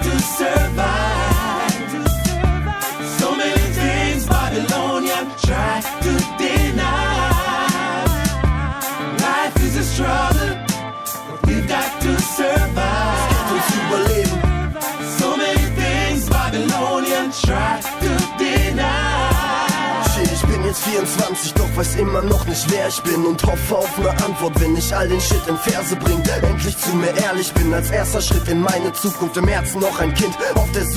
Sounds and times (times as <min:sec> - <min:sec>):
Male singing: 0:00.0 - 0:10.6, 0:11.3 - 0:30.9
Music: 0:00.0 - 0:30.9.